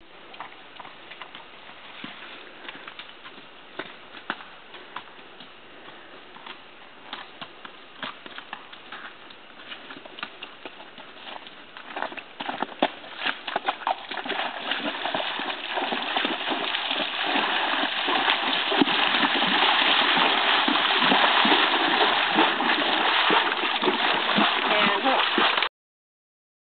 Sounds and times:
Horse: 0.2s - 25.7s
Splash, splatter: 13.9s - 25.7s.

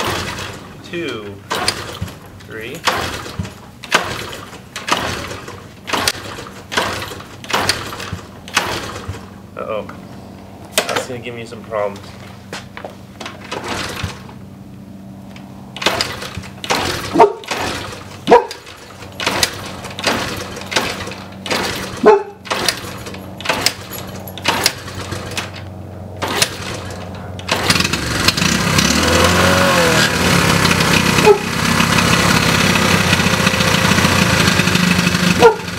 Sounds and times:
Motorcycle: 0.0s - 11.1s, 12.1s - 35.7s
Outside, urban or manmade: 0.0s - 35.7s
Speech: 0.8s - 1.4s, 2.5s - 2.8s, 9.6s - 10.0s, 10.8s - 12.1s.

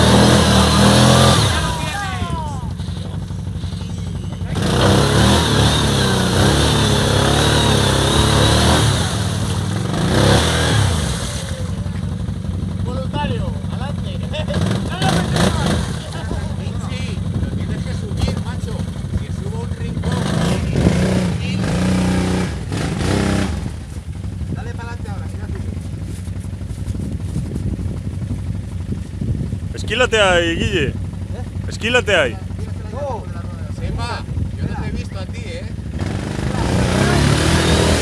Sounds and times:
Speech: 12.8s - 21.8s, 29.7s - 35.7s.

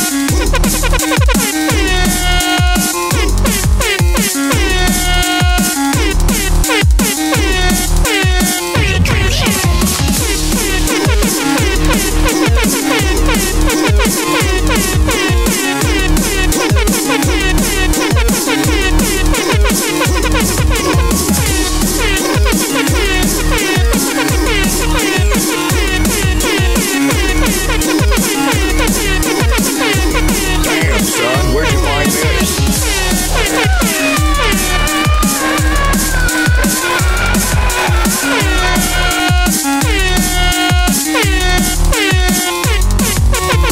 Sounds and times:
Music: 0.0s - 43.7s.

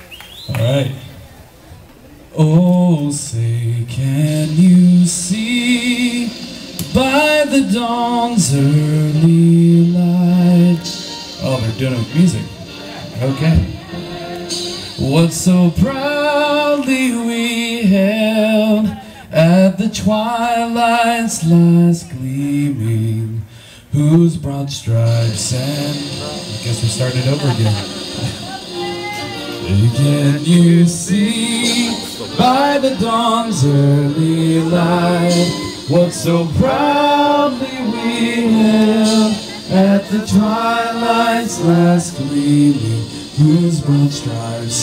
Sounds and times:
Male singing: 2.4s - 44.8s
Music: 2.8s - 44.8s.

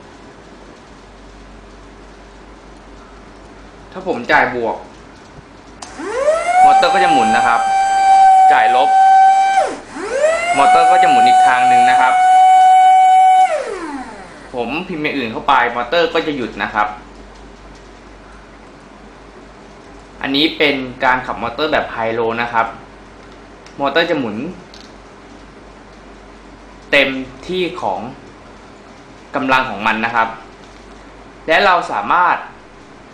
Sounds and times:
Inside, small room: 0.0s - 33.1s
Speech: 3.9s - 4.9s, 6.6s - 7.6s, 8.4s - 8.9s, 10.5s - 12.2s, 14.5s - 17.0s, 20.2s - 22.8s, 23.8s - 24.7s, 26.9s - 28.2s, 29.3s - 30.4s, 31.5s - 32.6s
Air horn, truck horn: 6.6s - 9.6s, 10.5s - 13.4s.

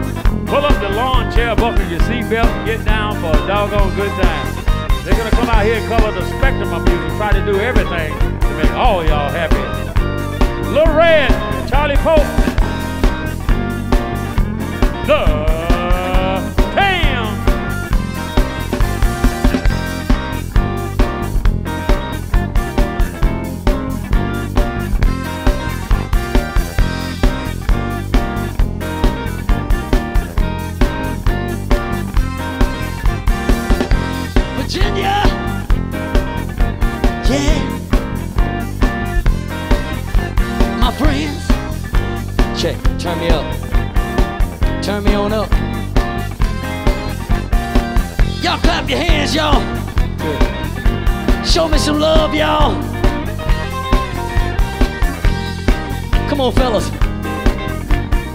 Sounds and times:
Pop music: 0.4s - 20.4s, 33.8s - 36.4s, 37.1s - 38.7s, 39.4s - 41.7s, 46.1s - 58.3s
Speech: 0.5s - 9.8s, 10.7s - 12.6s, 15.1s - 17.5s, 34.6s - 35.5s, 37.2s - 37.8s, 40.8s - 41.5s, 42.6s - 43.6s, 44.8s - 45.6s, 48.4s - 50.5s, 51.4s - 52.8s, 56.2s - 57.0s.

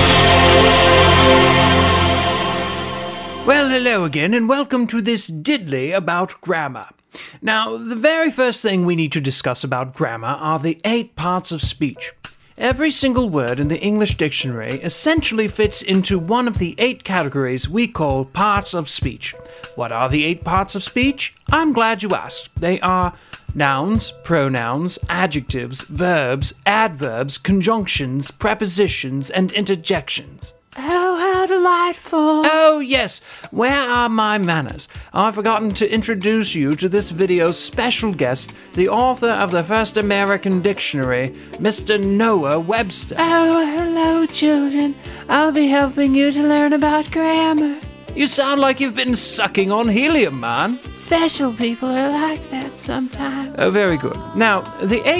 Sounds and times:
Music: 0.0s - 5.5s, 7.1s - 55.1s
Narration, monologue: 0.0s - 55.1s
Male speech, man speaking: 3.4s - 55.1s.

